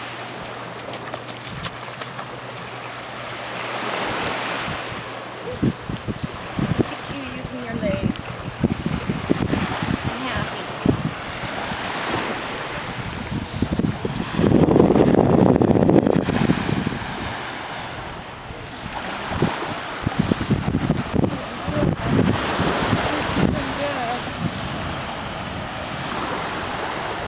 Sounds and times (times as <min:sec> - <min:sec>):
Speech: 0:06.9 - 0:08.5, 0:10.1 - 0:10.7, 0:23.1 - 0:24.3.